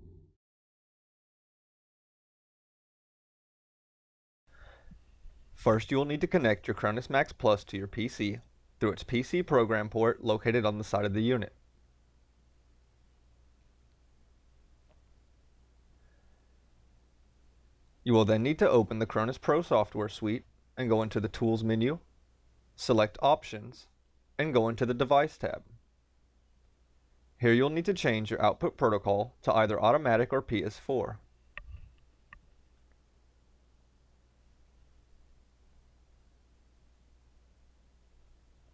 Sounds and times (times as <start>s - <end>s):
Speech: 5.6s - 11.6s, 18.0s - 22.1s, 22.8s - 25.8s, 27.4s - 31.2s.